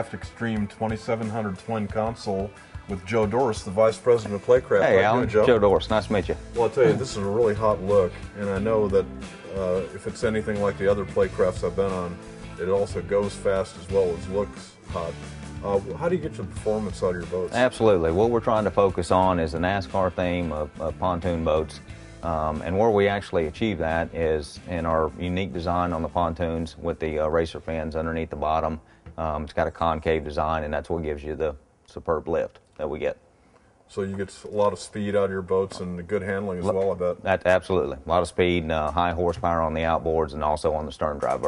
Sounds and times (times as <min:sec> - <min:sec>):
Music: 0:00.0 - 0:31.4, 0:33.9 - 0:41.4
Speech: 0:00.0 - 0:33.2, 0:33.9 - 0:41.4.